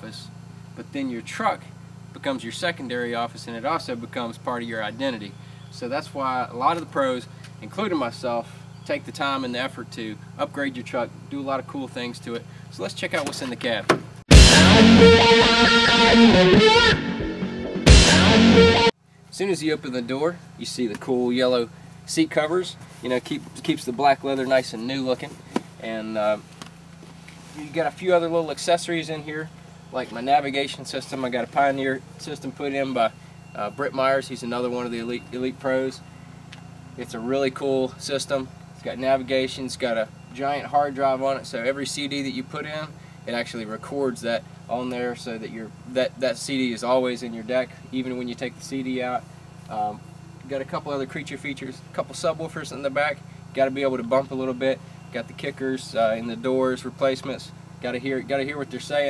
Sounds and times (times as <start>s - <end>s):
Speech: 0.0s - 13.9s, 19.3s - 26.5s, 27.6s - 36.0s, 37.0s - 59.1s
Music: 14.3s - 19.0s.